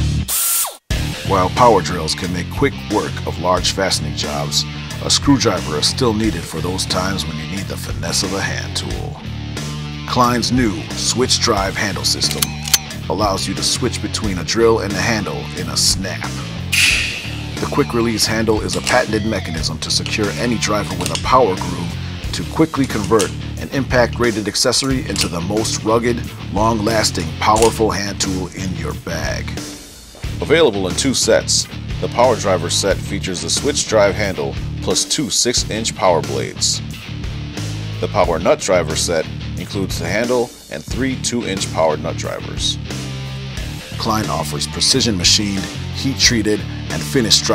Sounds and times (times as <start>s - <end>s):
Music: 0.0s - 47.5s
Speech: 1.2s - 9.2s, 10.1s - 16.4s, 17.6s - 29.6s, 30.4s - 36.8s, 38.0s - 42.8s, 43.9s - 47.5s.